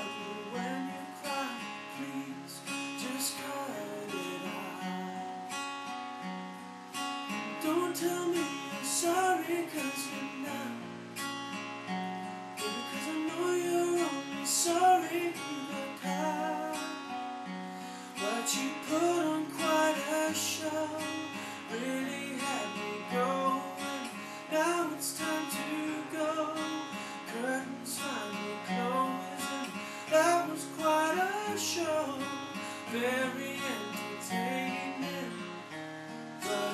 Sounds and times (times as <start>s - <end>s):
Music: 0.0s - 36.7s.